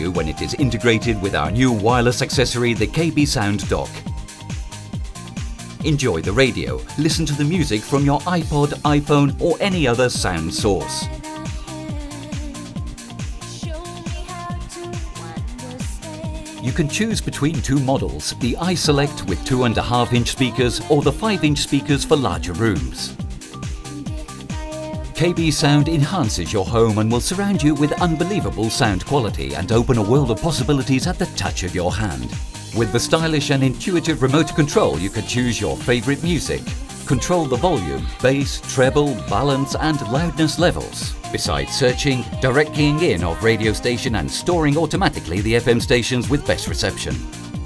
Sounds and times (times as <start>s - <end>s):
Speech: 0.0s - 4.0s, 5.8s - 11.2s, 16.6s - 23.2s, 25.1s - 47.3s
Music: 0.0s - 47.6s.